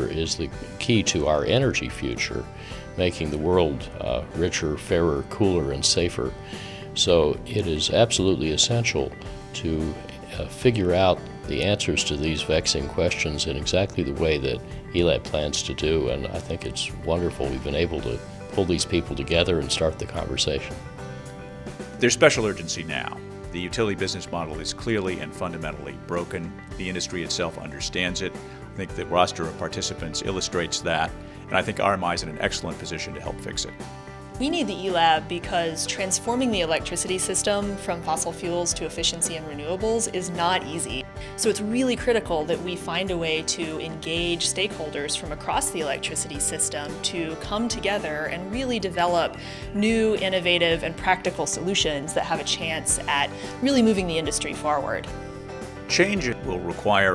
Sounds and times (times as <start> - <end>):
Speech: 0.0 - 2.4, 3.0 - 6.3, 7.0 - 20.7, 22.0 - 33.7, 55.9 - 57.1
Music: 0.0 - 57.1.